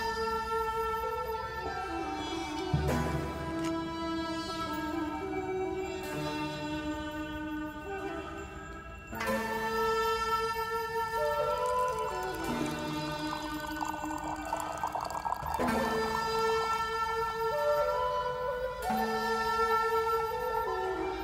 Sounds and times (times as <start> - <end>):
Music: 0.0 - 21.2.